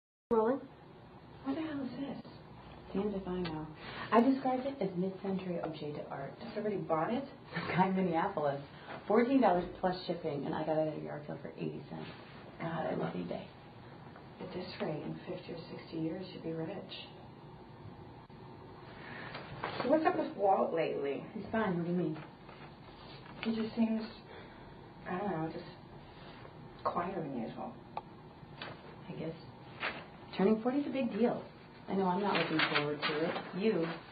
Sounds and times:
Speech: 0:00.3 - 0:00.7, 0:01.4 - 0:13.6, 0:14.4 - 0:17.2, 0:19.8 - 0:22.3, 0:23.4 - 0:24.3, 0:25.1 - 0:25.8, 0:26.8 - 0:27.8, 0:29.0 - 0:29.5, 0:30.3 - 0:34.1.

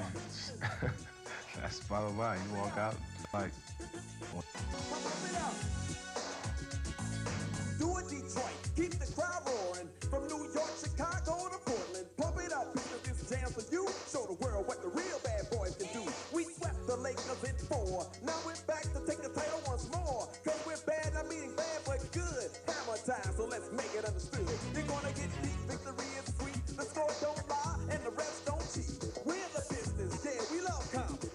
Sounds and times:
Music: 0:00.0 - 0:31.3.

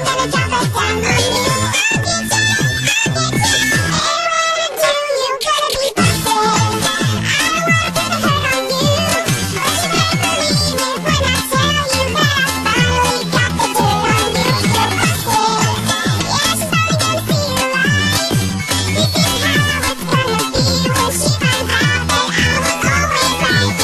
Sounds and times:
Music: 0:00.0 - 0:23.8.

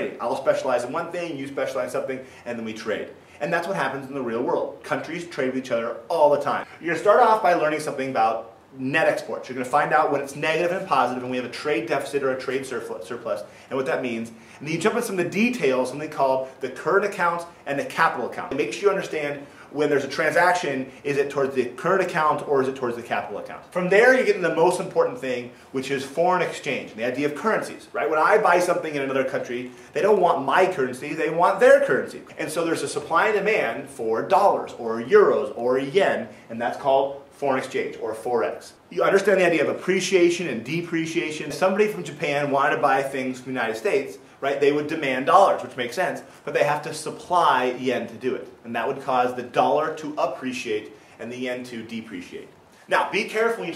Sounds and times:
Speech: 0:00.0 - 0:53.7.

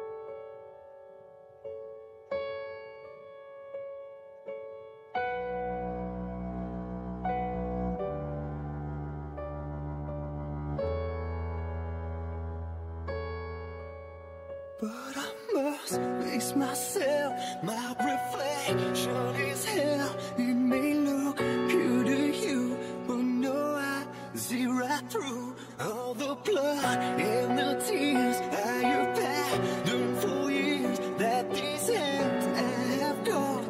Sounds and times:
Music: 0:00.0 - 0:33.6.

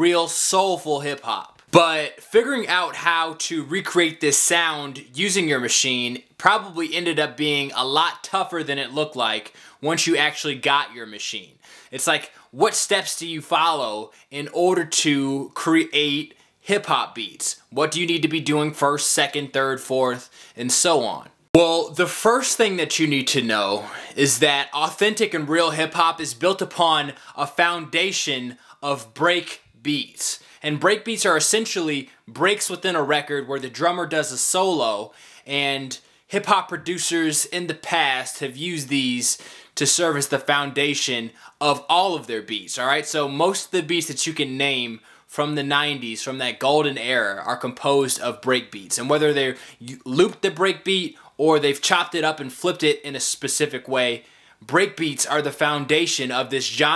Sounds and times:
Speech: 0:00.0 - 0:56.9.

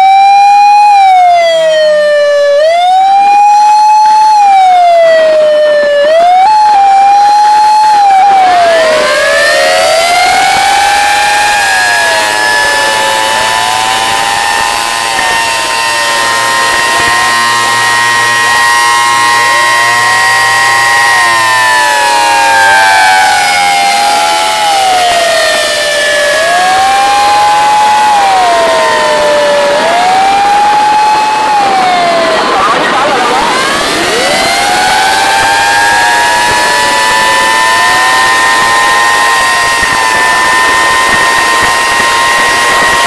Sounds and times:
Police car (siren): 0:00.0 - 0:43.0.

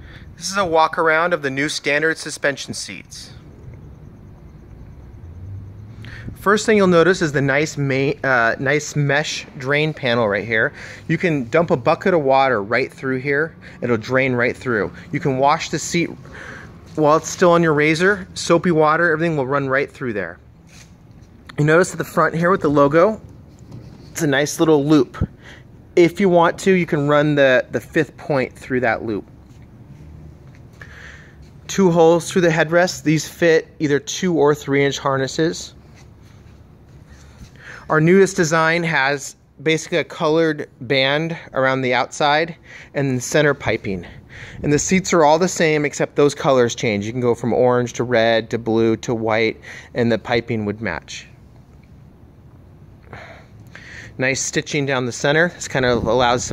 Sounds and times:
Speech: 0:00.4 - 0:03.4, 0:06.4 - 0:16.2, 0:16.9 - 0:20.4, 0:21.5 - 0:23.2, 0:24.2 - 0:25.3, 0:26.0 - 0:29.3, 0:31.7 - 0:35.8, 0:37.9 - 0:51.4, 0:54.2 - 0:56.5.

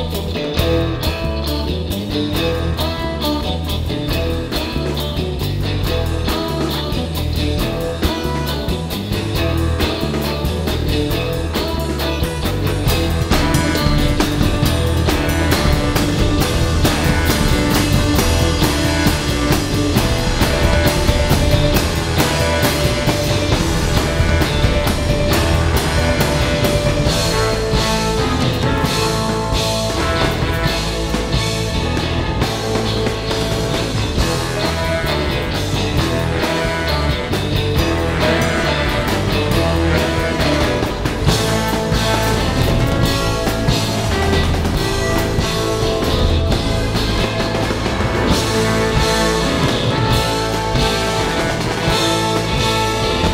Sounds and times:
Bass drum: 0:00.0 - 0:53.3
Drum kit: 0:00.0 - 0:53.3.

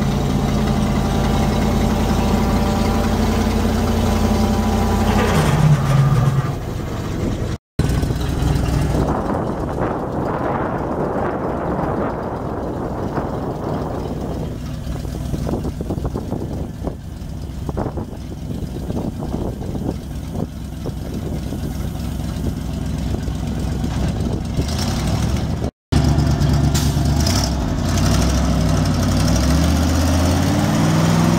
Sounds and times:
Truck: 0:00.0 - 0:31.3.

